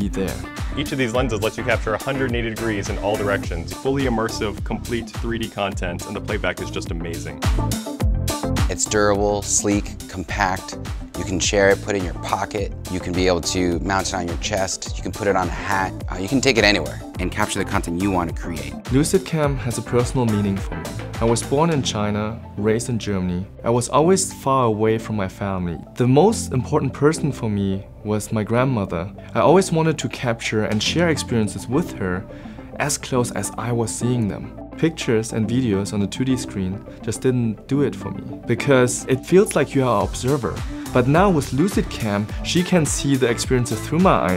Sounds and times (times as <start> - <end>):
Speech: 0.0 - 7.4, 8.7 - 44.3
Music: 0.0 - 44.3.